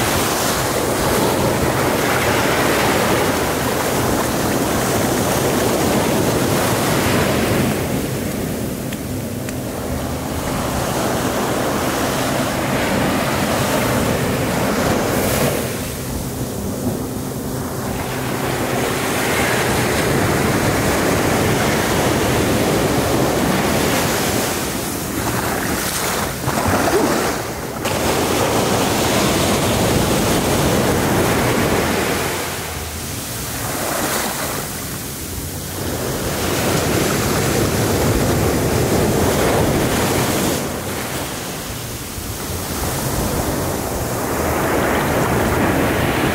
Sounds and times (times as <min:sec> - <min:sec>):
Waves, surf: 0:00.0 - 0:46.3.